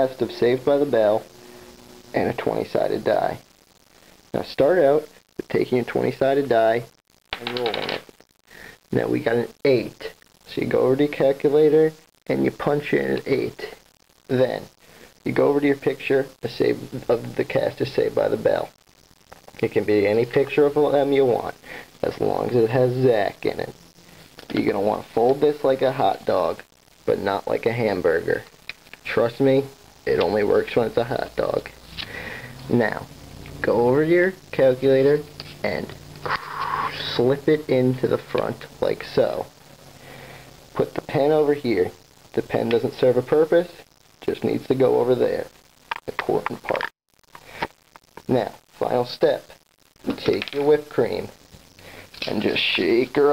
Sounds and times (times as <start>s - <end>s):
Speech: 0.0s - 1.3s, 2.1s - 3.4s, 4.4s - 8.0s, 8.9s - 14.7s, 15.3s - 18.8s, 19.6s - 23.8s, 24.5s - 31.8s, 32.7s - 39.5s, 40.8s - 45.5s, 46.1s - 46.9s, 48.2s - 51.4s, 52.2s - 53.3s.